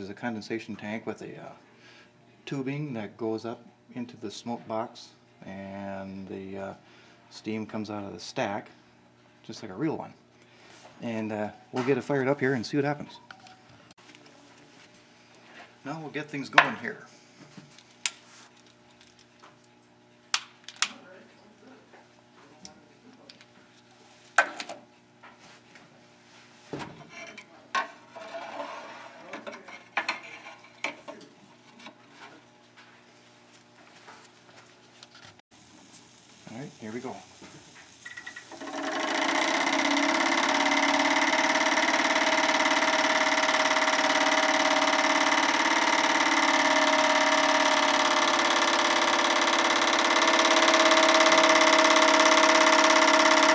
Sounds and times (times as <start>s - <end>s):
Speech: 0.0s - 1.6s, 2.4s - 8.8s, 9.5s - 10.2s, 11.0s - 13.3s, 15.8s - 17.1s, 36.5s - 37.3s.